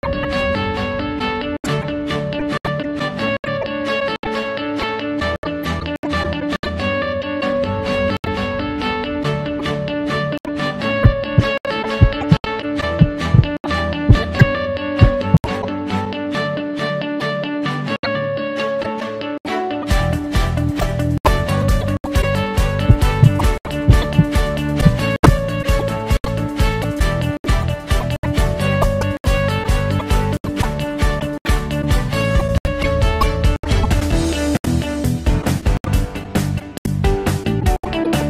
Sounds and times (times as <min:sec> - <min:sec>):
Music: 0:00.0 - 0:38.2
Heart sounds, heartbeat: 0:11.0 - 0:12.4, 0:13.0 - 0:15.4, 0:22.8 - 0:25.4.